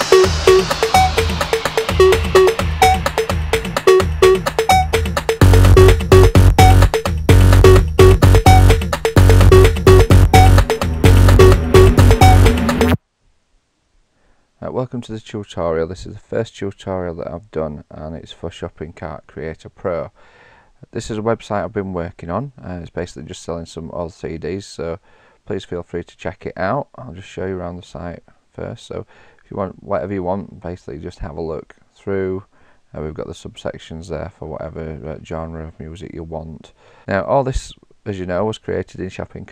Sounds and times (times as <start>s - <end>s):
Sampler: 0.0s - 13.0s.